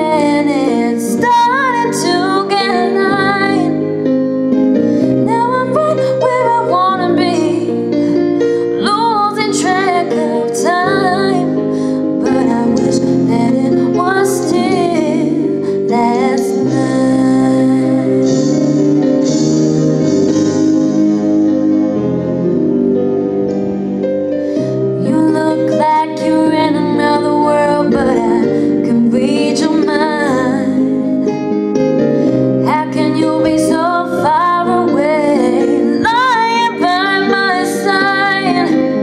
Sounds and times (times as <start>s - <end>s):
Female singing: 0.0s - 3.8s, 5.3s - 7.7s, 8.8s - 11.6s, 12.2s - 18.3s, 25.0s - 31.0s, 32.7s - 38.8s
Music: 0.0s - 39.0s.